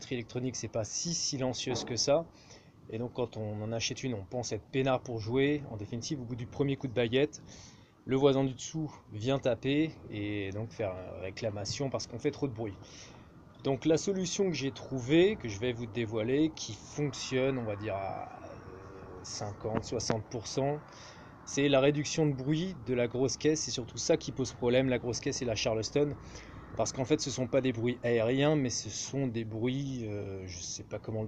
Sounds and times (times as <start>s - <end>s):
Speech: 0.0s - 2.3s, 2.9s - 7.4s, 8.1s - 12.8s, 13.6s - 20.9s, 21.5s - 26.2s, 26.8s - 31.2s.